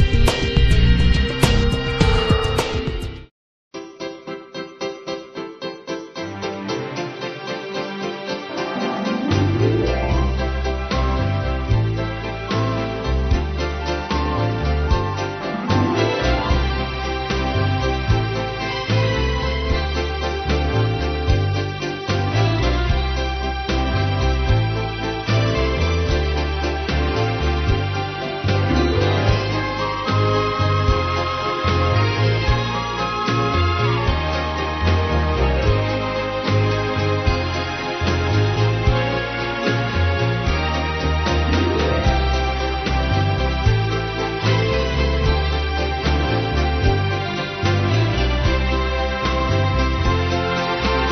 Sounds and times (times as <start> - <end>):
Music: 0.0 - 51.1.